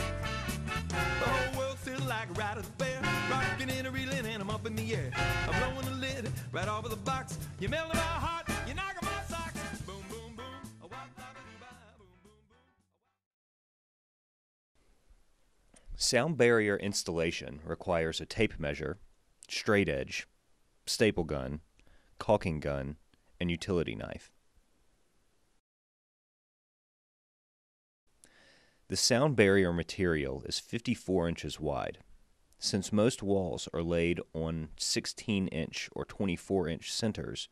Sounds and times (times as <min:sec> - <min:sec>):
Speech: 0:16.0 - 0:20.3, 0:20.9 - 0:21.6, 0:22.2 - 0:24.4, 0:28.9 - 0:32.0, 0:32.6 - 0:37.5.